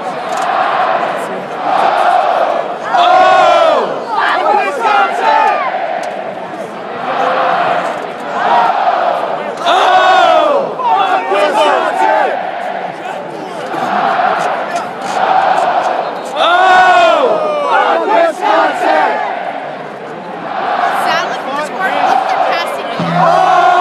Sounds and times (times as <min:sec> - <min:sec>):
Speech: 0:00.0 - 0:23.8.